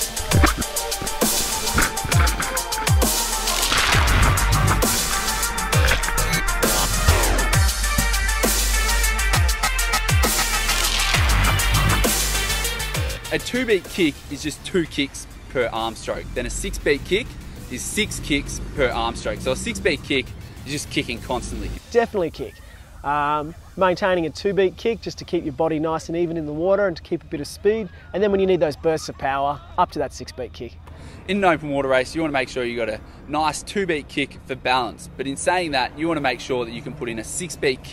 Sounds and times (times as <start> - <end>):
Speech: 13.3 - 37.9.